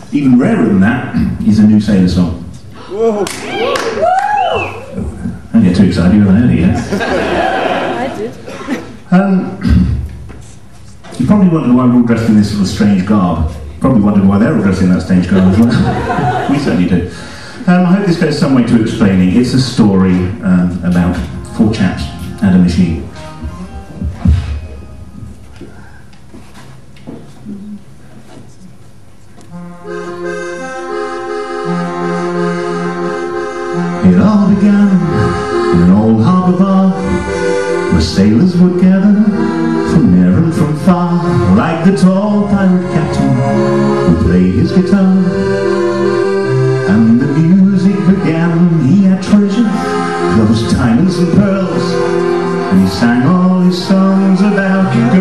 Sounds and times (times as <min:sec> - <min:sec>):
Music: 0:18.3 - 0:25.9, 0:29.5 - 0:55.2.